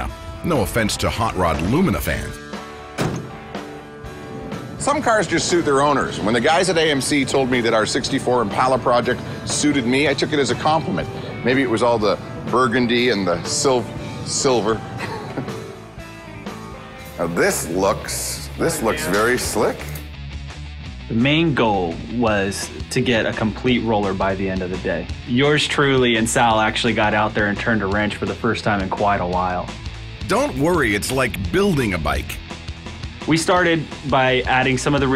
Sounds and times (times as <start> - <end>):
Music: 0.0 - 35.1.